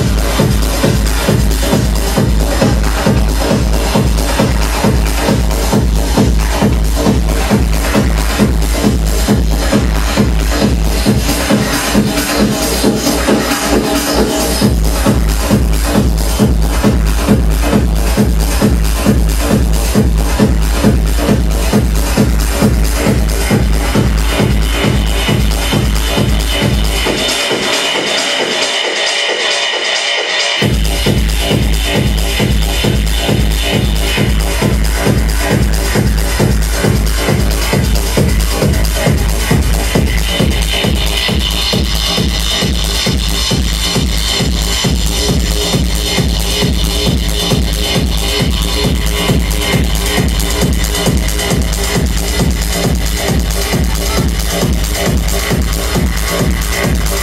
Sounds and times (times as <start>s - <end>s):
Techno: 0.0s - 57.2s.